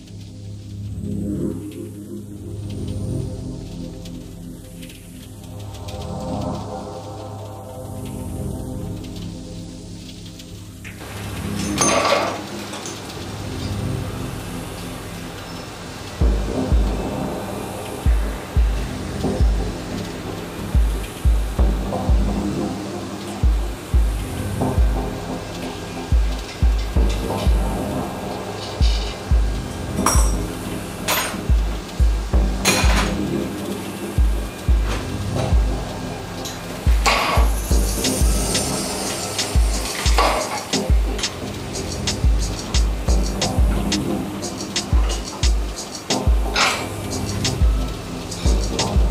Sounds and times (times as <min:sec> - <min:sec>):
Music: 0:00.0 - 0:49.1.